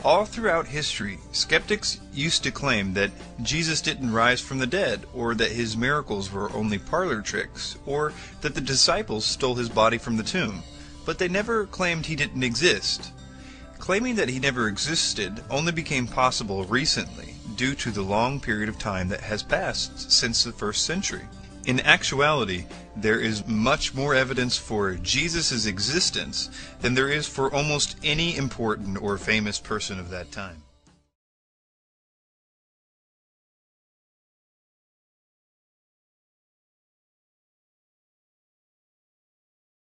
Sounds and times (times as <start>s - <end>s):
Speech: 0.0s - 13.1s, 13.8s - 30.6s
Music: 0.0s - 31.2s.